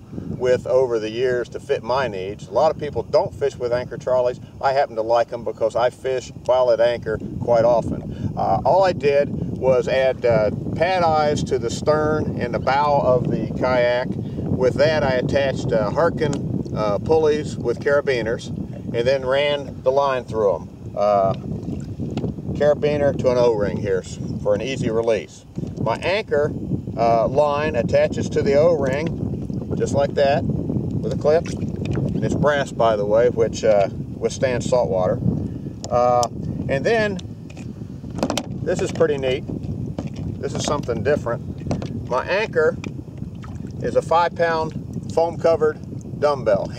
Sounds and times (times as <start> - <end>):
Speech: 0.4 - 21.4, 22.6 - 29.1, 29.7 - 30.4, 32.2 - 35.2, 35.9 - 37.2, 38.7 - 39.4, 40.4 - 41.4, 42.1 - 42.8, 43.8 - 46.7.